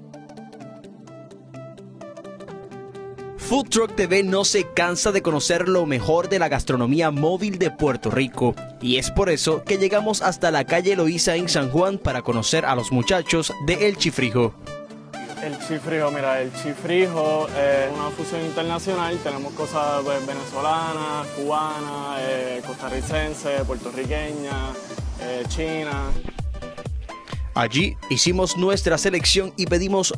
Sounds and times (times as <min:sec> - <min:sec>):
Music: 0:00.0 - 0:30.1
Speech: 0:03.4 - 0:14.6, 0:15.4 - 0:26.2, 0:27.6 - 0:30.1.